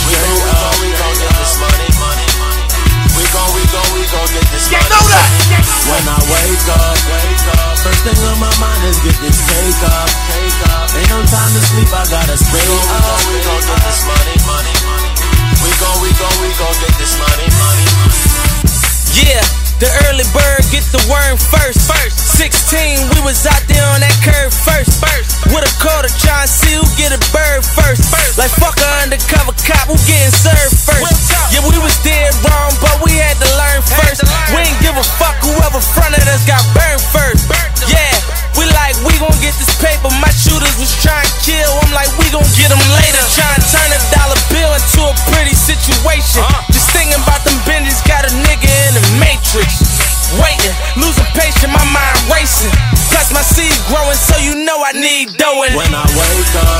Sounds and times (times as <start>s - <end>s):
Music: 0.0s - 56.7s
Rapping: 0.0s - 56.7s.